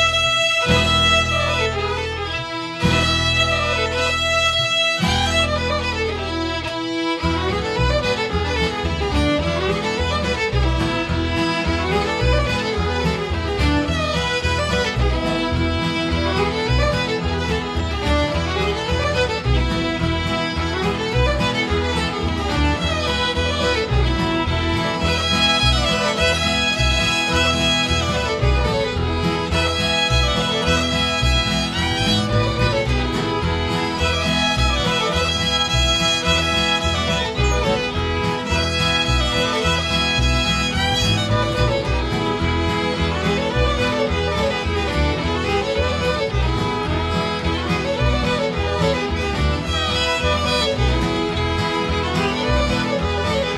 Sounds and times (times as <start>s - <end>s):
Music: 0.0s - 53.5s.